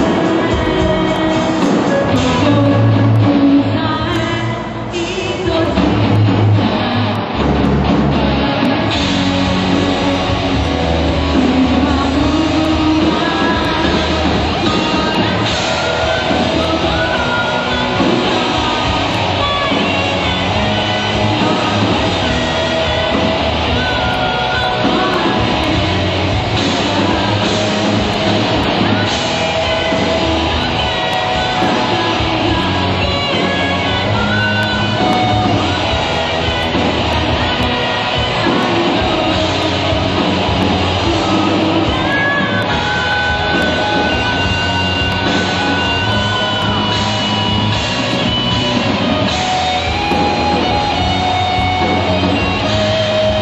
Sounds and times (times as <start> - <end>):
Musical instrument: 0.0 - 53.4.